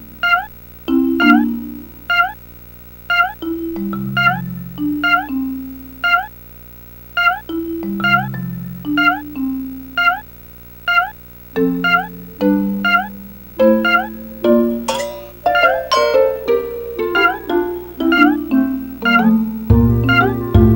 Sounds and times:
Marimba, xylophone: 0.9s - 1.7s, 7.5s - 9.5s, 11.6s - 20.7s
Glockenspiel: 0.9s - 1.8s, 3.4s - 5.5s, 7.5s - 10.1s, 11.6s - 20.7s.

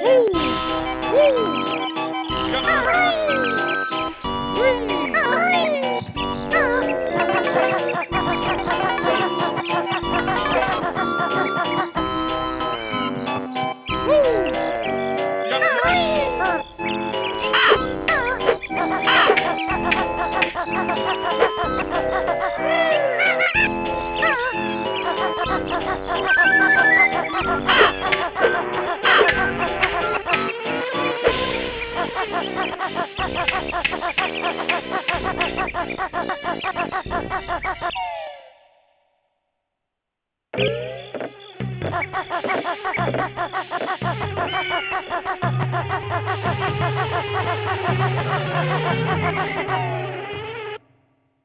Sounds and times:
Music: 0.0s - 39.0s, 40.6s - 51.0s.

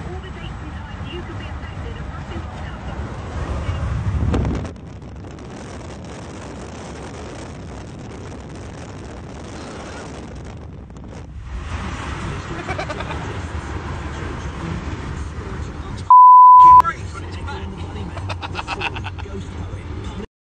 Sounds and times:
Speech: 0.0s - 3.9s, 16.8s - 20.3s.

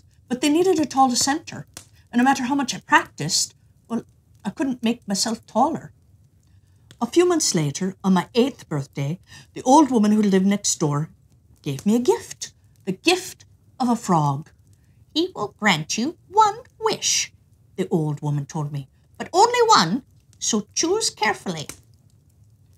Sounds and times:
Speech: 0.3s - 5.9s, 7.0s - 11.1s, 11.7s - 14.5s, 15.2s - 21.8s.

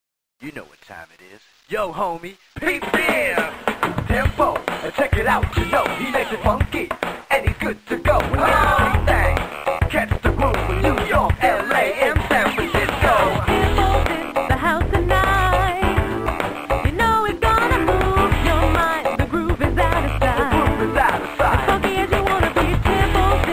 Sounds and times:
Speech: 0.4s - 3.5s
Music: 2.6s - 23.5s.

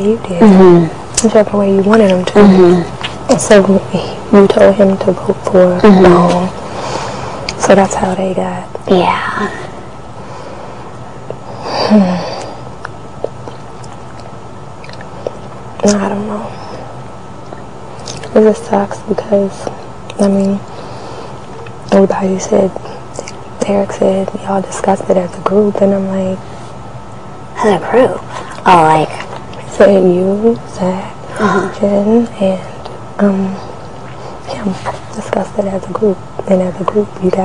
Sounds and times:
Speech: 0.0s - 6.6s, 7.6s - 9.7s, 15.8s - 16.8s, 18.3s - 20.6s, 21.9s - 26.4s, 27.6s - 33.7s, 34.5s - 37.4s.

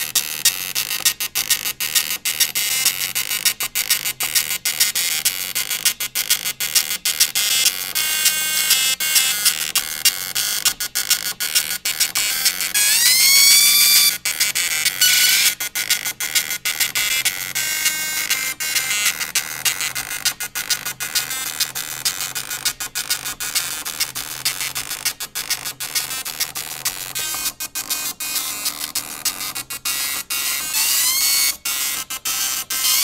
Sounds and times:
Printer: 0.0s - 33.0s.

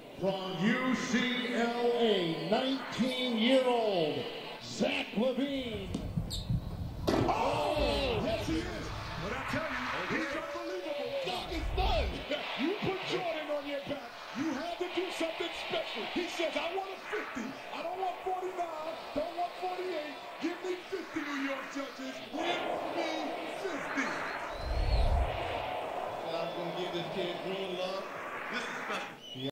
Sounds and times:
Speech: 0.2s - 6.0s, 7.2s - 24.3s, 26.3s - 28.1s.

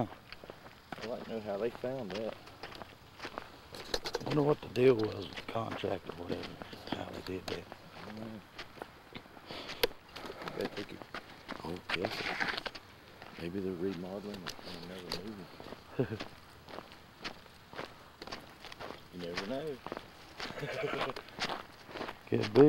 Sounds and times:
Walk, footsteps: 0.0s - 22.6s
Speech: 1.0s - 2.4s, 4.2s - 8.4s, 10.4s - 11.0s, 11.6s - 12.4s, 13.4s - 15.5s, 19.1s - 19.8s, 22.3s - 22.6s.

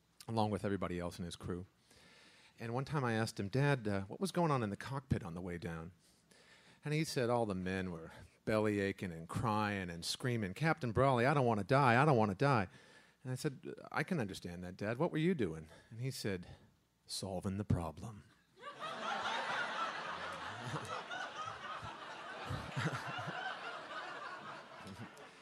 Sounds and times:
Speech: 0.2s - 1.7s, 2.6s - 6.0s, 6.9s - 12.7s, 13.3s - 18.3s.

